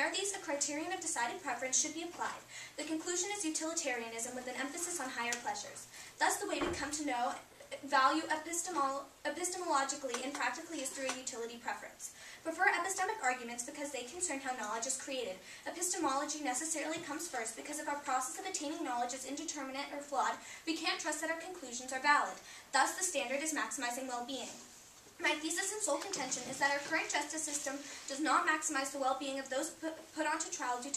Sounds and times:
Female speech, woman speaking: 0.0 - 24.6, 25.2 - 30.9
Narration, monologue: 0.0 - 30.9.

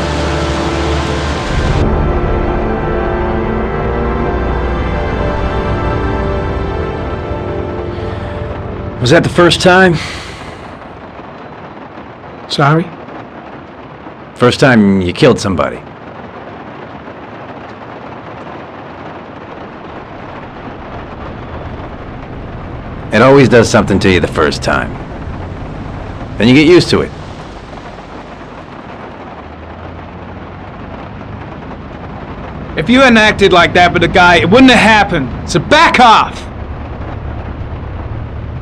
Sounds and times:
Rain on surface: 0.0 - 38.6
Speech: 9.0 - 10.0, 12.5 - 12.9, 14.4 - 15.8, 23.1 - 24.9, 26.4 - 27.1, 32.8 - 36.5.

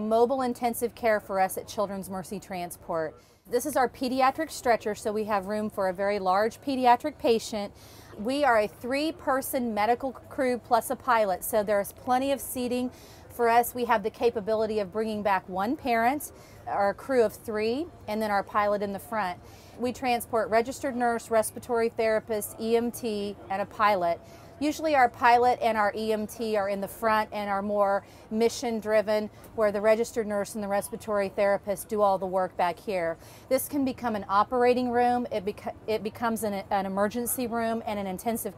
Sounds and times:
Speech: 0.0 - 38.5.

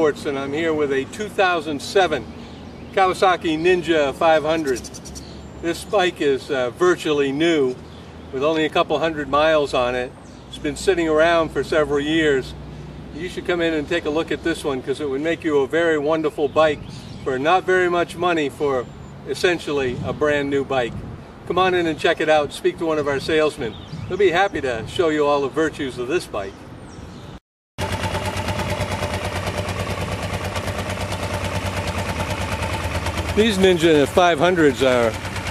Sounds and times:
Speech: 0.0 - 2.2, 3.0 - 4.8, 5.6 - 7.8, 8.4 - 12.6, 13.2 - 26.6, 33.4 - 35.2.

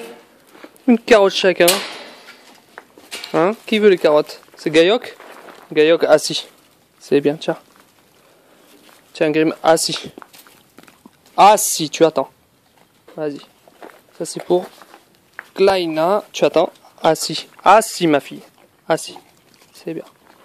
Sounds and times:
Speech: 0.9 - 2.0, 3.3 - 7.7, 9.1 - 10.2, 11.4 - 12.3, 13.1 - 13.5, 14.2 - 14.8, 15.6 - 20.2.

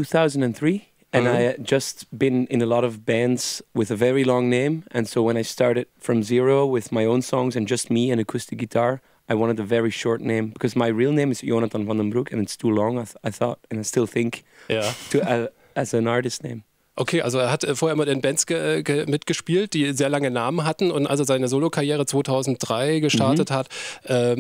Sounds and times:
Speech: 0.0 - 24.4.

